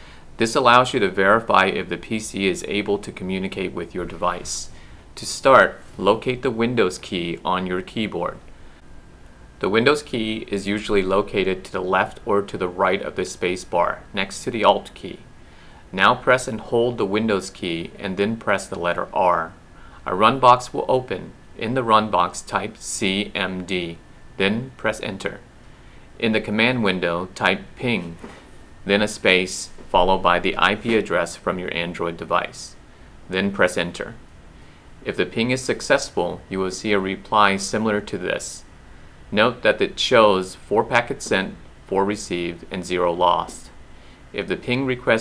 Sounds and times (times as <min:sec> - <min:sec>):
Speech: 0:00.4 - 0:08.4, 0:09.6 - 0:15.3, 0:15.9 - 0:25.5, 0:26.2 - 0:34.2, 0:35.0 - 0:38.7, 0:39.3 - 0:45.2.